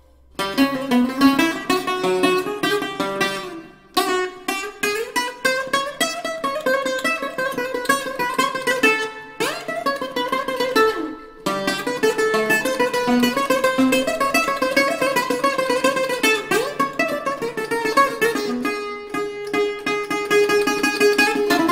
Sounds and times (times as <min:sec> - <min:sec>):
Mandolin: 0:00.0 - 0:21.7.